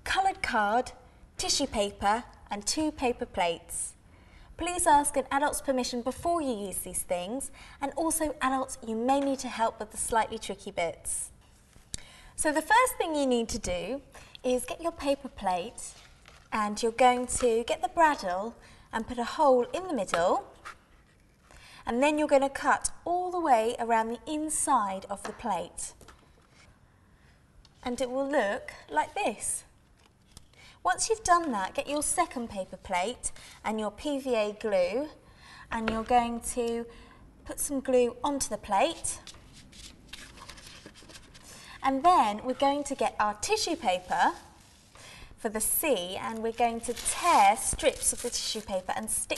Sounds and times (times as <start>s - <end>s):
Speech: 0.1s - 4.0s, 4.6s - 11.3s, 12.4s - 15.9s, 16.6s - 20.5s, 21.9s - 26.0s, 27.8s - 29.7s, 30.9s - 36.9s, 37.5s - 39.2s, 41.8s - 44.4s, 45.4s - 49.3s.